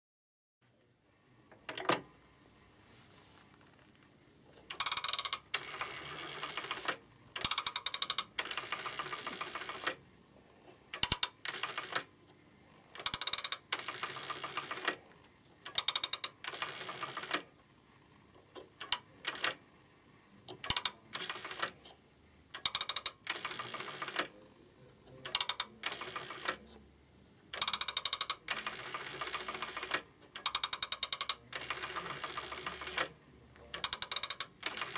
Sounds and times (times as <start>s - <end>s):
Telephone: 4.7s - 10.0s, 10.9s - 12.1s, 12.9s - 17.6s, 18.8s - 19.6s, 20.5s - 21.9s, 22.5s - 24.4s, 25.2s - 26.8s, 27.5s - 34.9s.